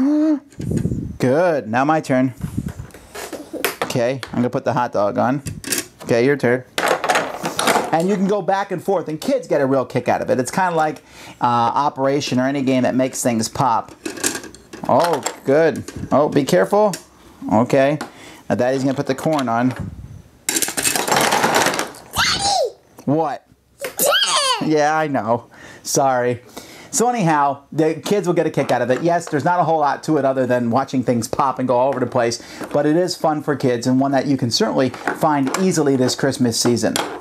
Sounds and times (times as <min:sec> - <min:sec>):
Inside, small room: 0:00.0 - 0:37.2
Child speech, kid speaking: 0:22.2 - 0:22.8.